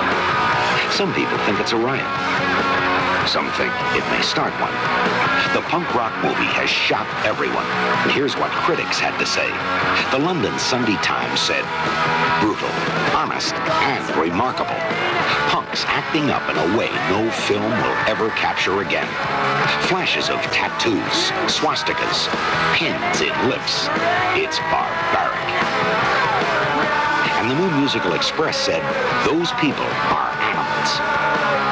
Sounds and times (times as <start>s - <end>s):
Music: 0.0s - 31.7s
Speech: 0.8s - 2.1s, 3.2s - 11.7s, 12.3s - 25.6s, 27.3s - 31.0s.